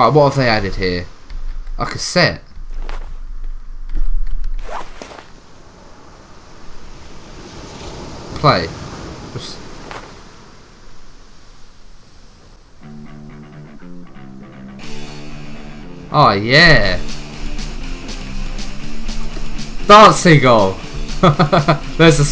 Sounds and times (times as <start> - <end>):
Speech: 0.0 - 1.1, 1.8 - 2.5, 8.4 - 8.8, 9.4 - 9.6, 16.1 - 17.1, 19.9 - 20.8, 22.0 - 22.3.